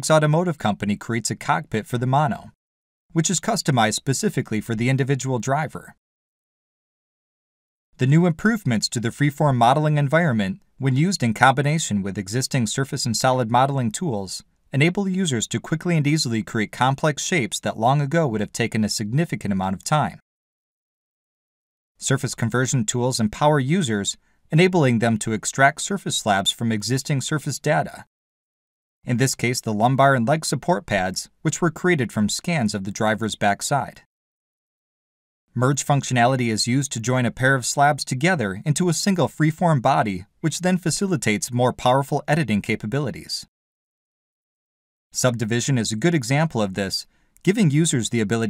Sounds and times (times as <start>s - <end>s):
Speech: 0.0s - 2.6s, 3.2s - 6.0s, 8.0s - 20.2s, 22.0s - 28.1s, 29.1s - 34.1s, 35.6s - 43.5s, 45.2s - 48.4s.